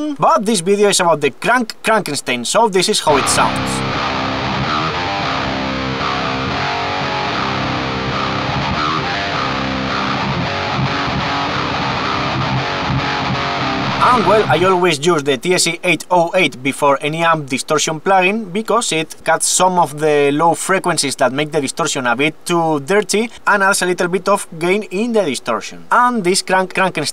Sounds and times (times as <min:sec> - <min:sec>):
Strum: 0:03.1 - 0:04.6
Electric guitar: 0:03.1 - 0:14.8.